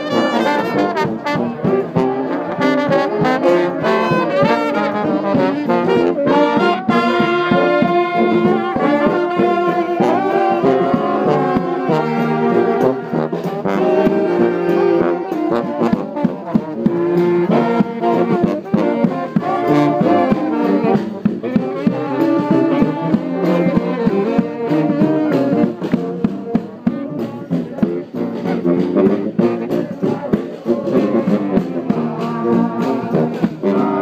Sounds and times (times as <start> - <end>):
Trombone: 0.0 - 34.0
Trumpet: 0.0 - 34.0.